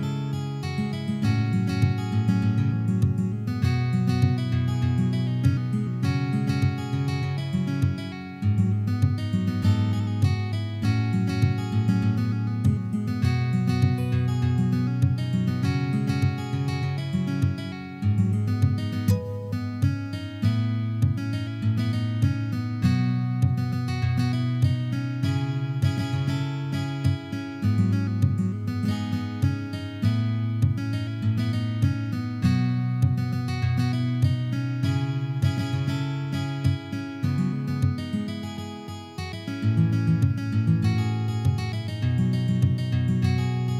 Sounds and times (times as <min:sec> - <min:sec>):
Acoustic guitar: 0:00.0 - 0:43.7
Strum: 0:00.0 - 0:43.7.